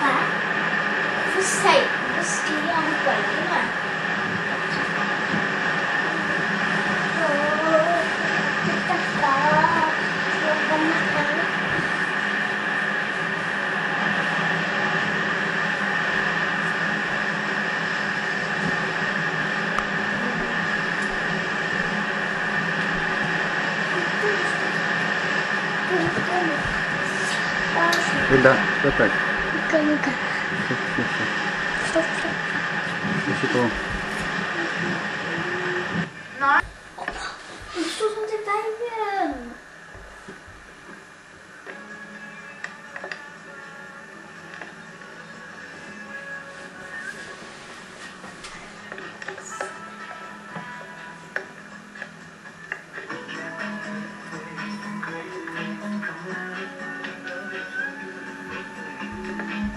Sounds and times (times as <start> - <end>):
Speech: 1.3 - 3.8, 8.7 - 11.5, 33.2 - 33.8, 37.8 - 39.6.